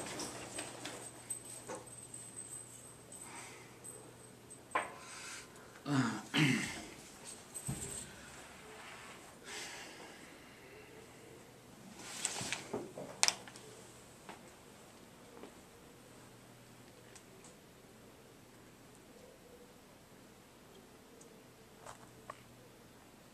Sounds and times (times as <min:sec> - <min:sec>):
Inside, small room: 0:00.0 - 0:23.3.